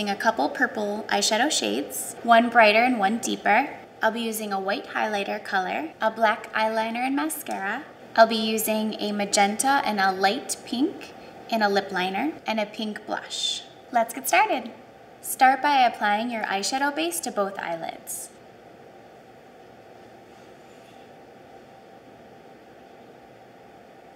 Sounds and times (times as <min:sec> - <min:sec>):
Speech: 0:00.0 - 0:18.4.